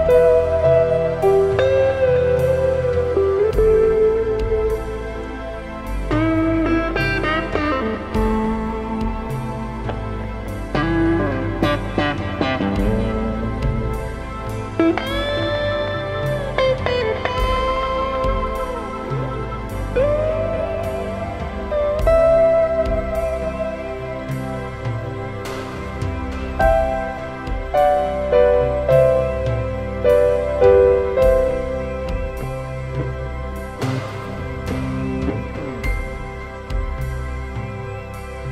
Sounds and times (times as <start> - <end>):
Steel guitar, slide guitar: 0.0 - 38.5.